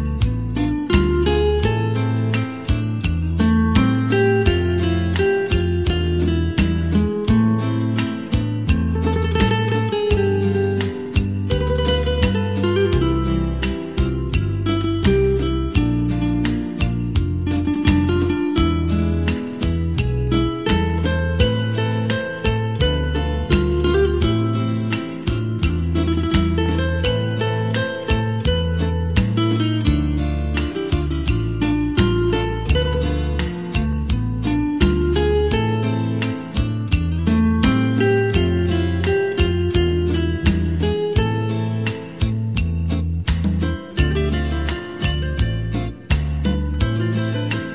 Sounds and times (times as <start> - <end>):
Acoustic guitar: 0.0 - 47.7
Strum: 0.0 - 47.7.